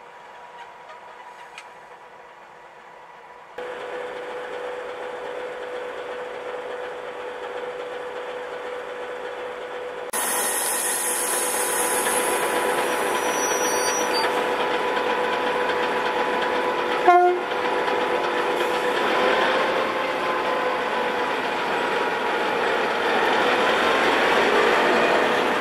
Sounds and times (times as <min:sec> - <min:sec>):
Train: 0:00.0 - 0:25.6
Vehicle horn, car horn, honking: 0:17.1 - 0:17.5.